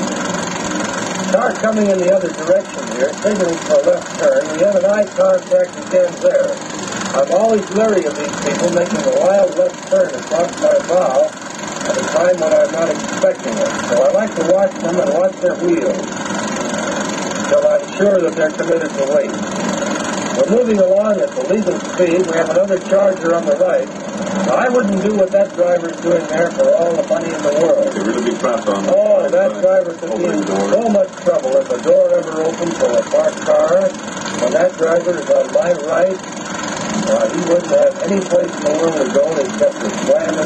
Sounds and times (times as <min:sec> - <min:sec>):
Speech: 0:01.3 - 0:06.6, 0:07.2 - 0:11.3, 0:11.9 - 0:16.1, 0:17.5 - 0:19.4, 0:20.4 - 0:23.9, 0:24.5 - 0:36.2, 0:37.0 - 0:40.4.